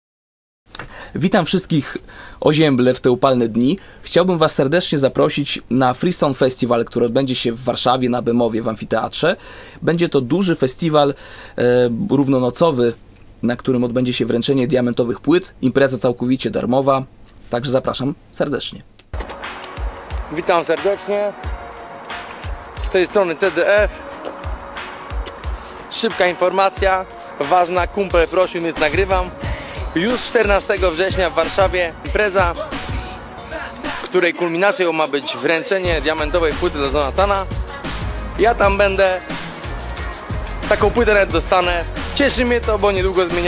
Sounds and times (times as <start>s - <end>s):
Speech: 1.2s - 18.9s, 20.3s - 21.4s, 22.8s - 24.0s, 25.9s - 29.3s, 30.0s - 32.6s, 34.1s - 37.5s, 38.4s - 39.2s, 40.7s - 43.4s
Music: 19.1s - 43.4s.